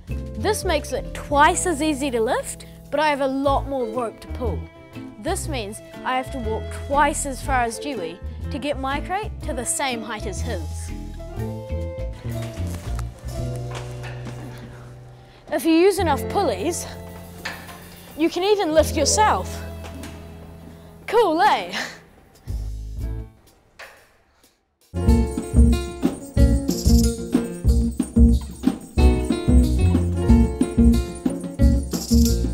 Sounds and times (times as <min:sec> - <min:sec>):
Music: 0:00.0 - 0:32.5
Speech: 0:00.4 - 0:04.6, 0:05.2 - 0:10.9, 0:15.5 - 0:17.0, 0:18.2 - 0:19.7, 0:21.1 - 0:22.0.